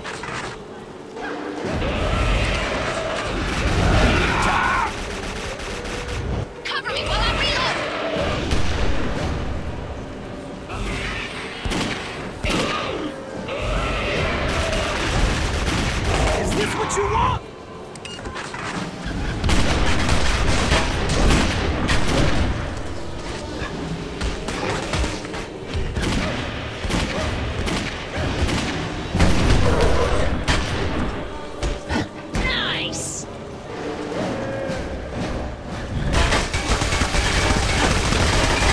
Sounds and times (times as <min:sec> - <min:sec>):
Music: 0:00.0 - 0:38.7
Fusillade: 0:02.1 - 0:06.6, 0:13.8 - 0:16.8, 0:19.3 - 0:22.7, 0:36.1 - 0:38.7.